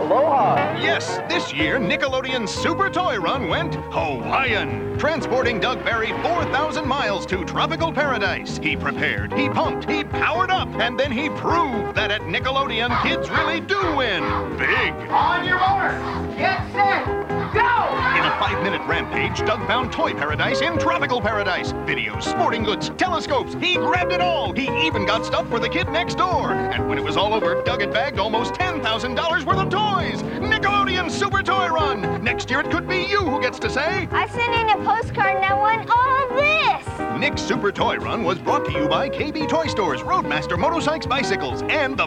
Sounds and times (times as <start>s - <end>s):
Music: 0.0s - 42.0s
Speech: 0.1s - 42.0s.